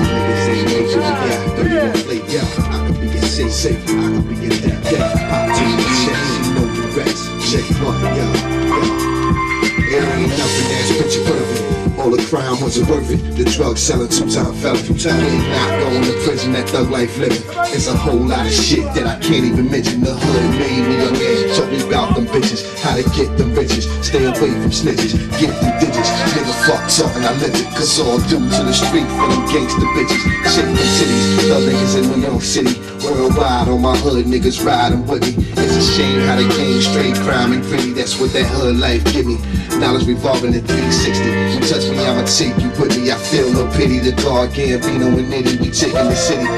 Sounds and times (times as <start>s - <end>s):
Music: 0.0s - 46.5s.